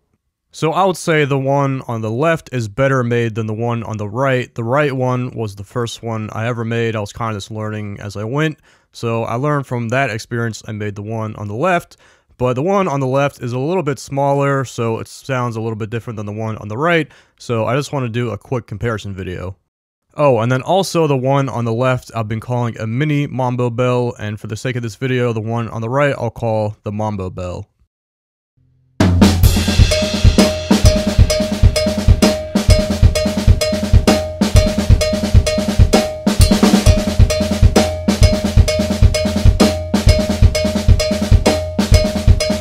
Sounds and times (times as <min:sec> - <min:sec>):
Speech: 0:00.6 - 0:19.6, 0:20.2 - 0:27.7.